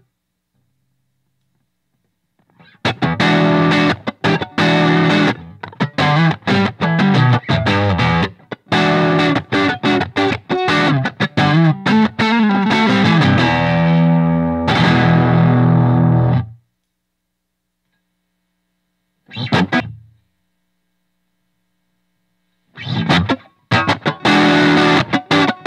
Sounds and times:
Effects unit: 0.0 - 16.9, 17.9 - 25.6
Guitar: 2.4 - 16.7, 19.2 - 20.3, 22.6 - 25.6.

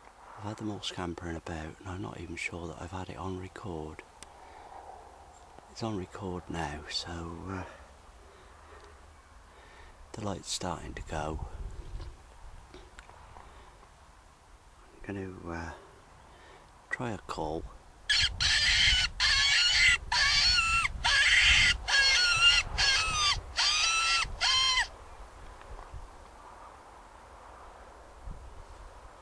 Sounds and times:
Speech: 0.4 - 4.0, 5.8 - 7.8, 10.1 - 11.6, 15.0 - 15.8, 16.9 - 17.7
Animal: 18.1 - 24.9.

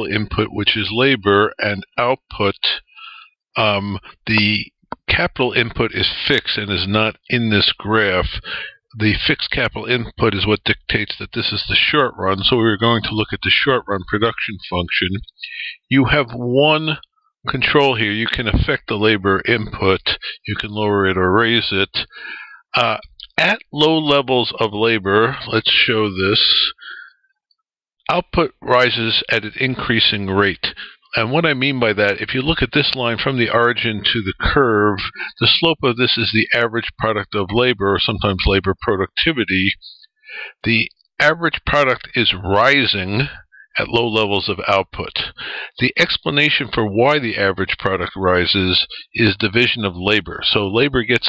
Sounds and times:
Speech: 0.0 - 27.1, 28.1 - 51.2.

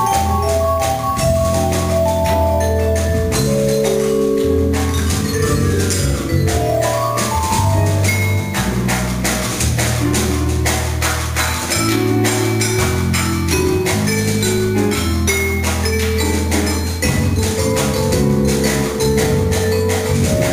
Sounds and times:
Vibraphone: 0.0 - 20.5.

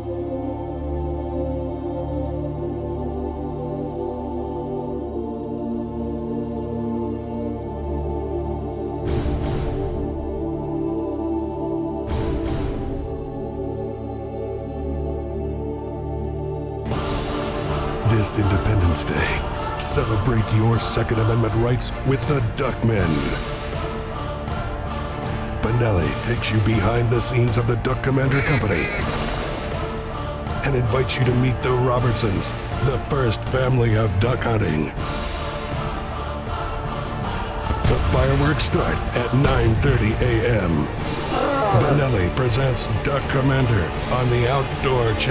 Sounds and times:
Music: 0.0 - 45.3
Speech: 18.0 - 23.4, 25.6 - 29.1, 30.6 - 35.0, 37.9 - 45.3.

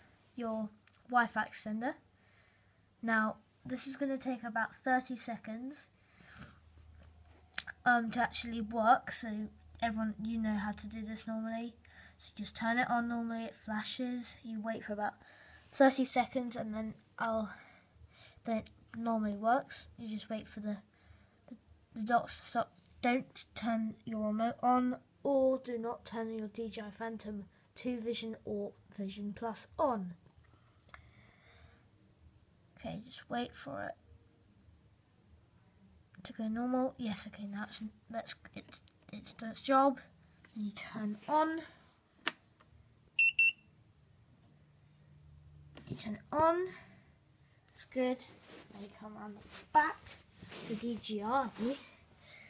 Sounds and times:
Inside, small room: 0.0 - 52.5
Speech: 0.4 - 2.0, 3.0 - 5.9, 7.6 - 15.2, 15.8 - 17.6, 18.4 - 20.9, 21.5 - 30.2, 32.8 - 34.0, 36.2 - 41.8, 45.8 - 46.9, 47.8 - 52.0
Beep, bleep: 43.2 - 43.7.

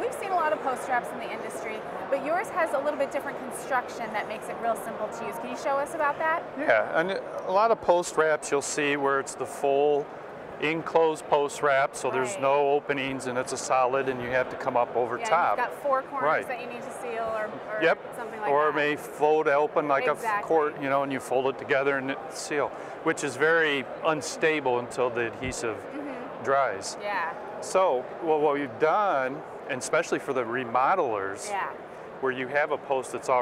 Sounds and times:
Speech: 6.6 - 10.0, 10.6 - 16.4, 17.8 - 28.7.

